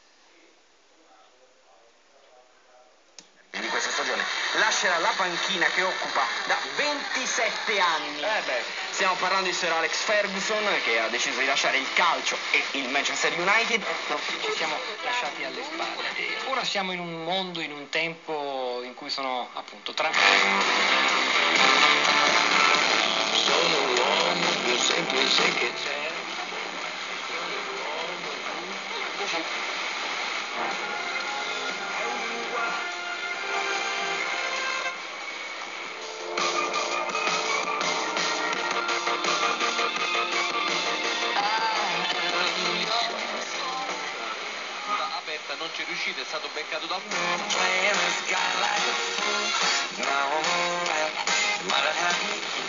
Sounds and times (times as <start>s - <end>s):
Radio: 0.0s - 52.6s
Speech: 0.3s - 3.0s, 3.6s - 20.2s, 23.5s - 29.6s, 44.9s - 47.2s.